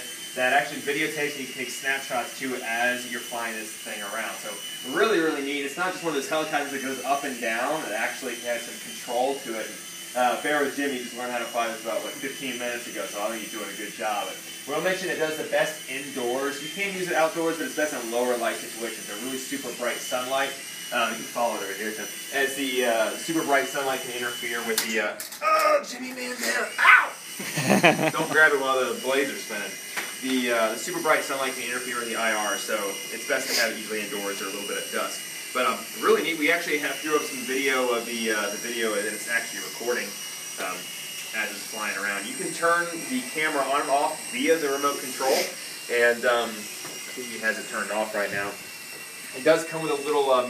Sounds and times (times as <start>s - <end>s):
Speech: 0.4s - 27.1s, 28.2s - 48.6s, 49.4s - 50.4s.